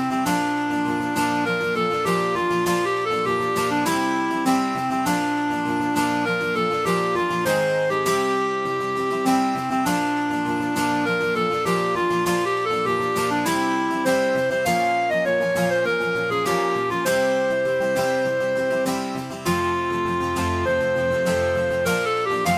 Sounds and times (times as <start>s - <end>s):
Acoustic guitar: 0.0s - 22.5s.